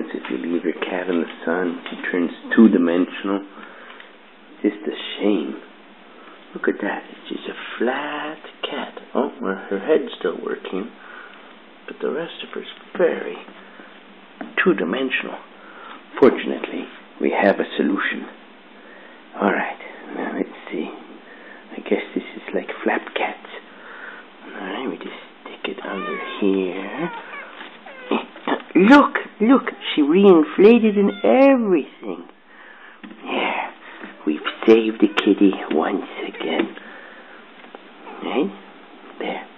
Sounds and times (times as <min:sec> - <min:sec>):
Speech: 0:00.0 - 0:03.5, 0:04.6 - 0:05.7, 0:06.5 - 0:11.0, 0:11.9 - 0:13.5, 0:14.4 - 0:15.5, 0:16.1 - 0:18.4, 0:19.3 - 0:23.7, 0:24.4 - 0:27.3, 0:28.0 - 0:32.4, 0:33.2 - 0:36.8, 0:38.0 - 0:39.5
Meow: 0:25.9 - 0:28.2, 0:30.7 - 0:31.6.